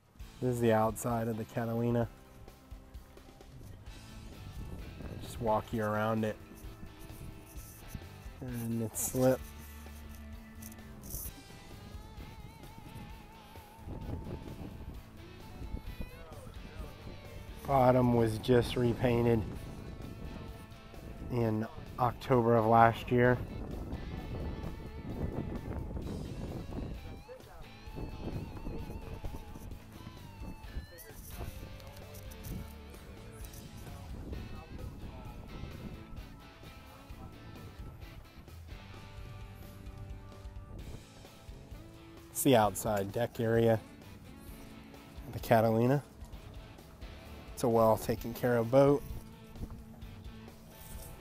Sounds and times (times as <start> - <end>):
Music: 0.0 - 51.2
Speech: 0.4 - 2.1, 5.2 - 6.4, 8.4 - 9.4, 17.6 - 19.5, 21.3 - 23.5, 33.2 - 35.5, 42.4 - 43.8, 45.3 - 46.0, 47.6 - 49.1.